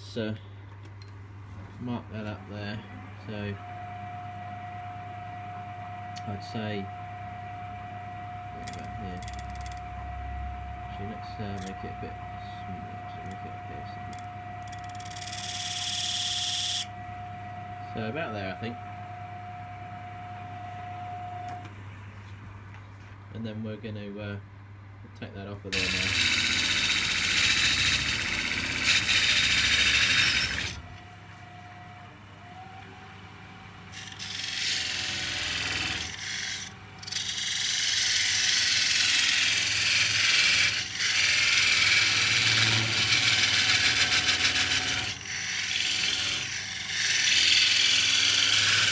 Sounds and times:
Gears: 0:08.6 - 0:09.8, 0:11.5 - 0:11.8, 0:14.1 - 0:16.9, 0:25.7 - 0:30.8, 0:33.9 - 0:48.9
Ratchet, pawl: 0:08.6 - 0:09.8, 0:14.1 - 0:16.9, 0:25.7 - 0:30.8, 0:33.9 - 0:48.9.

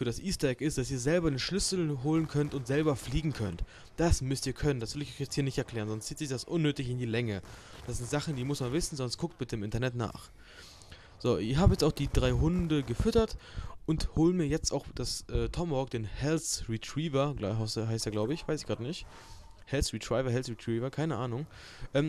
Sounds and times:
Speech: 0:00.0 - 0:10.3, 0:11.2 - 0:19.1, 0:19.7 - 0:22.0.

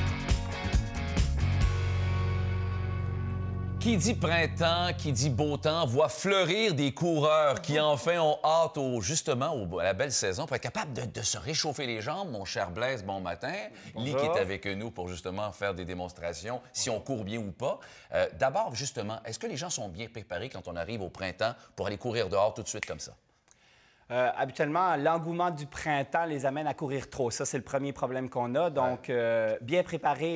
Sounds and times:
Speech: 0:03.8 - 0:23.2, 0:24.1 - 0:30.3.

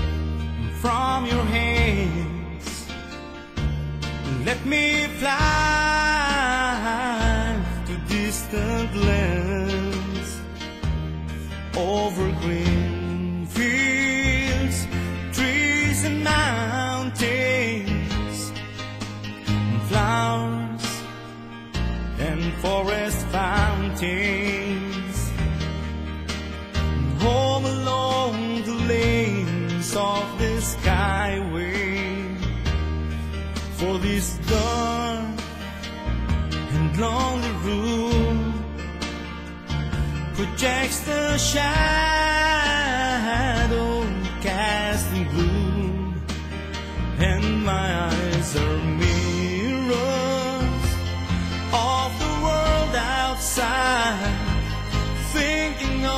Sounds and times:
Music: 0:00.0 - 0:56.1.

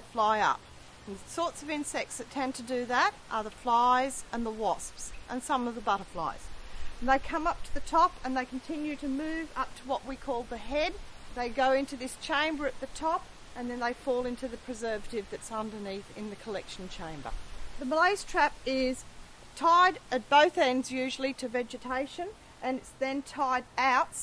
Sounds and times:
Speech: 0:00.0 - 0:19.0, 0:19.6 - 0:24.2.

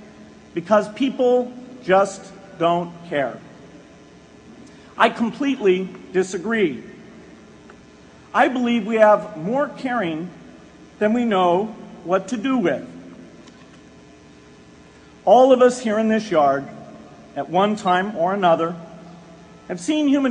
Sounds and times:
Narration, monologue: 0:00.0 - 0:20.3
Male speech, man speaking: 0:00.6 - 0:03.4, 0:05.0 - 0:06.9, 0:08.4 - 0:10.4, 0:11.0 - 0:12.9, 0:15.3 - 0:16.8, 0:17.4 - 0:18.8, 0:19.7 - 0:20.3.

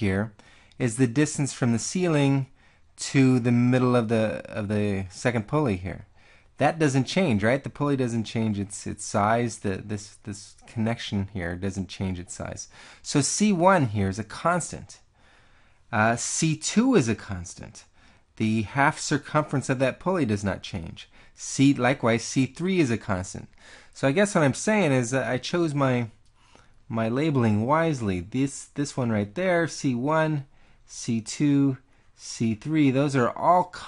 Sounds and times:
Speech: 0:00.0 - 0:15.1, 0:15.9 - 0:26.2, 0:26.9 - 0:33.8.

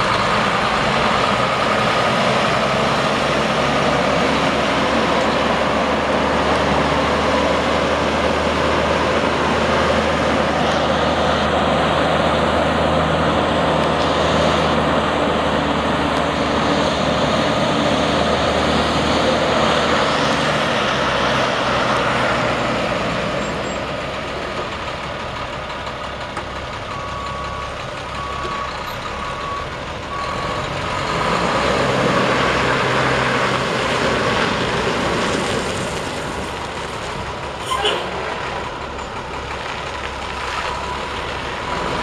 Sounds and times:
Truck: 0:00.0 - 0:42.0.

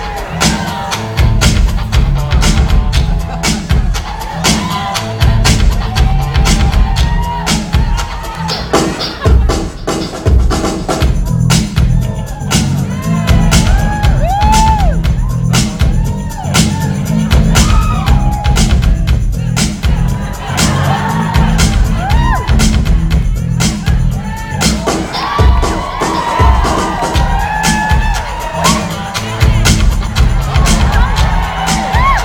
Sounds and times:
Dance music: 0:00.0 - 0:32.2.

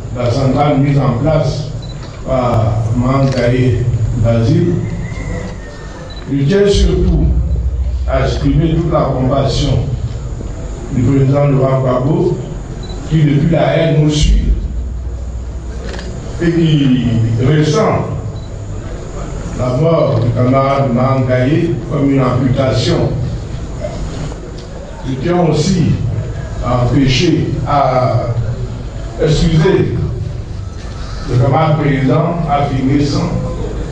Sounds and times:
Speech: 0:00.2 - 0:05.0, 0:06.3 - 0:07.4, 0:08.0 - 0:10.0, 0:10.9 - 0:12.5, 0:13.1 - 0:14.7, 0:16.4 - 0:18.3, 0:19.6 - 0:24.0, 0:24.8 - 0:30.2, 0:31.3 - 0:33.9.

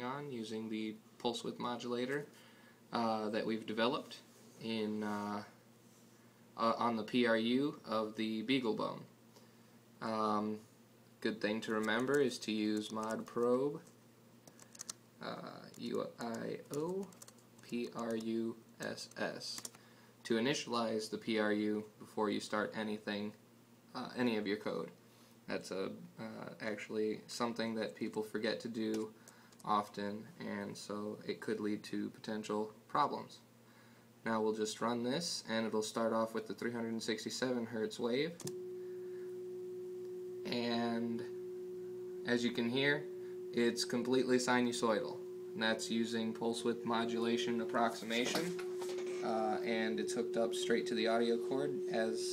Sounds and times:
Speech: 0:00.0 - 0:02.3, 0:02.9 - 0:05.6, 0:06.6 - 0:09.1, 0:10.0 - 0:13.9, 0:15.2 - 0:33.5, 0:34.2 - 0:38.4, 0:40.5 - 0:41.3, 0:42.3 - 0:52.3.

